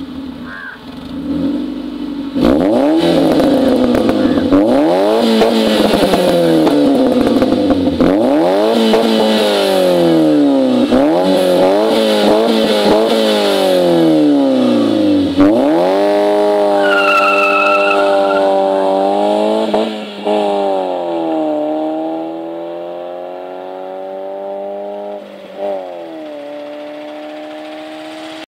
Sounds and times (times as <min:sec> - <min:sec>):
Clatter: 0:25.0 - 0:28.4.